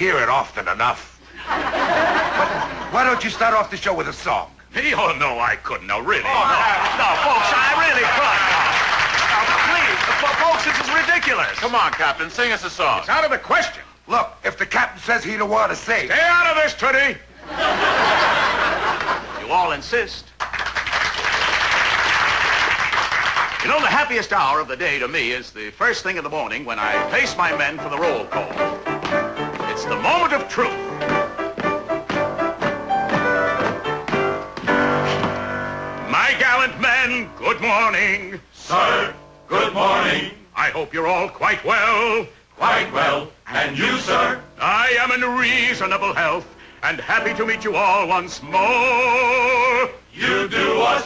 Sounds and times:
Speech: 0.0 - 1.2, 2.9 - 8.6, 9.3 - 17.3, 19.4 - 20.3, 23.6 - 28.6, 29.8 - 30.8, 40.6 - 41.9.

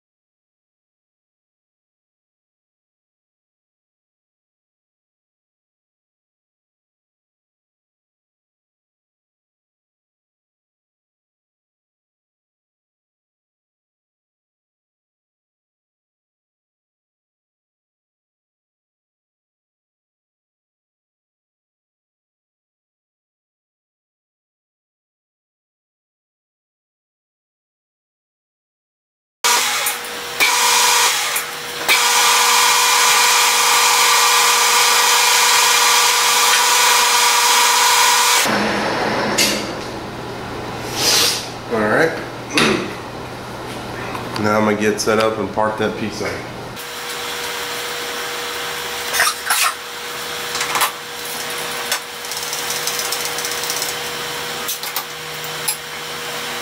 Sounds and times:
Speech: 41.7 - 42.8, 44.0 - 46.5
Tools: 49.1 - 49.8, 50.6 - 56.0.

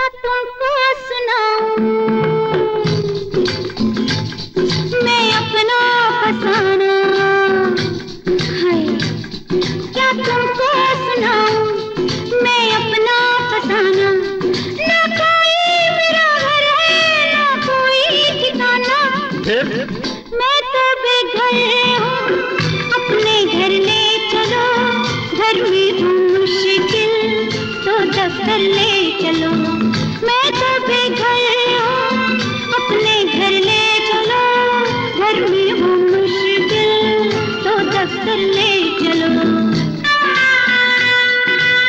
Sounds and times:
Music of Bollywood: 0.0 - 41.8.

